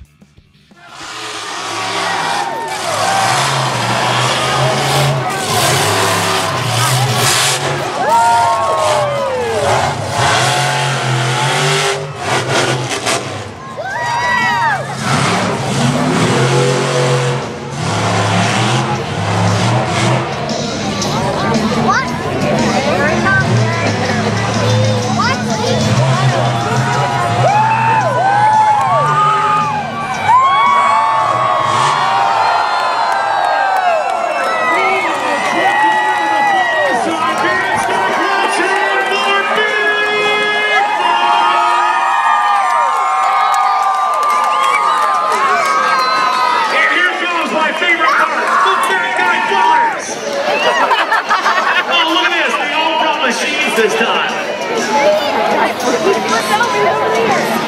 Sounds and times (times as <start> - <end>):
Music: 0.0 - 1.4, 19.2 - 31.9
Truck: 0.0 - 57.6.